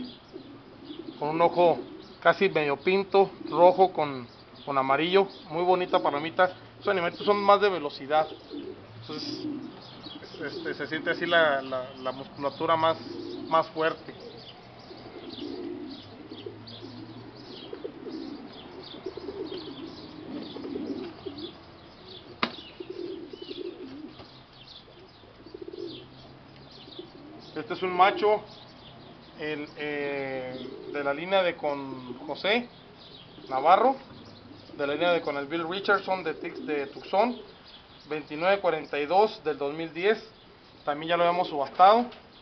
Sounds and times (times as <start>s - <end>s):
Pigeon, dove: 0.0s - 42.4s
Speech: 1.2s - 8.3s, 9.1s - 9.4s, 10.4s - 14.1s, 27.6s - 28.5s, 29.4s - 32.7s, 33.5s - 34.0s, 34.8s - 37.4s, 38.1s - 40.3s, 40.9s - 42.2s.